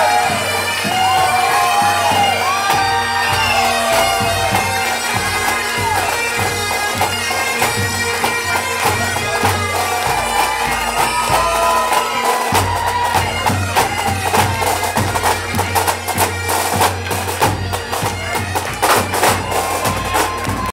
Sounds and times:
Bagpipes: 0.0s - 20.7s.

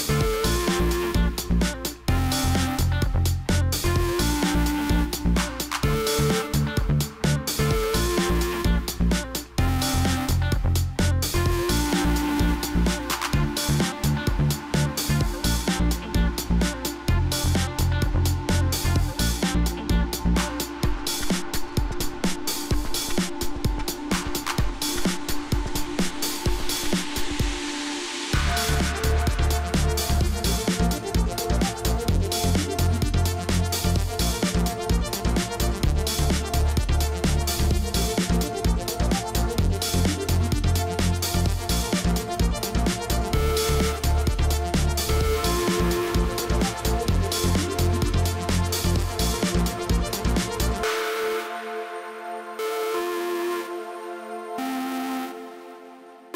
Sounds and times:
Music: 0.0s - 56.3s.

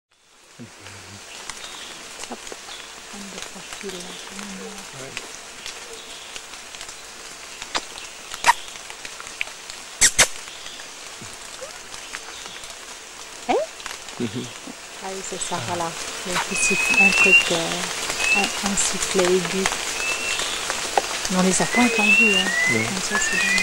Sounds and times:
Outside, rural or natural: 0.1s - 23.6s
Speech: 0.6s - 1.2s, 3.2s - 5.2s, 13.5s - 19.7s, 21.3s - 23.6s.

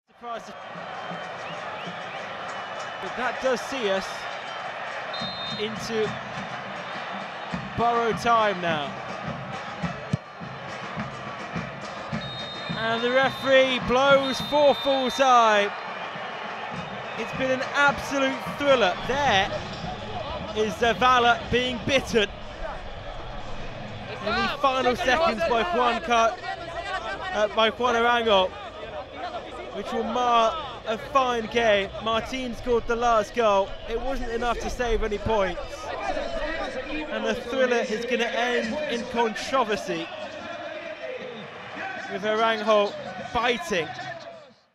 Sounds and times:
Speech: 0.2s - 0.5s, 3.0s - 4.2s, 5.6s - 6.2s, 7.8s - 8.9s, 12.8s - 15.7s, 17.2s - 19.6s, 20.3s - 22.3s, 24.2s - 28.5s, 29.2s - 41.2s, 41.9s - 44.2s.

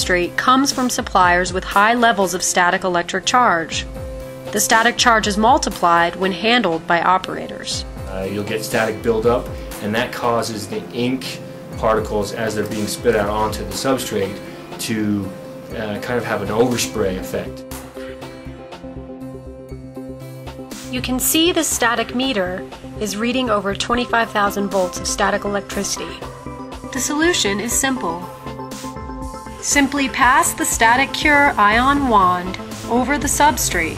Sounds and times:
Speech: 0.0s - 3.8s, 4.6s - 17.6s, 21.0s - 26.2s, 27.0s - 28.3s, 29.7s - 33.9s
Music: 0.0s - 33.9s.

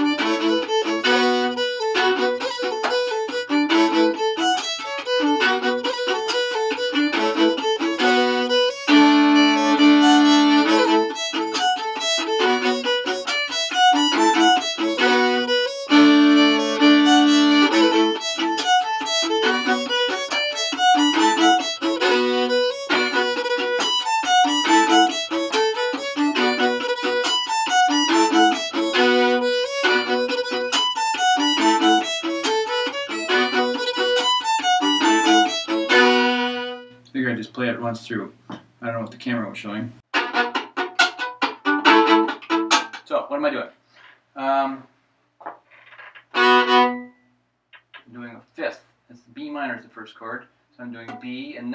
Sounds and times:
Violin, fiddle: 0.0s - 37.0s, 40.1s - 43.0s, 45.9s - 47.2s.

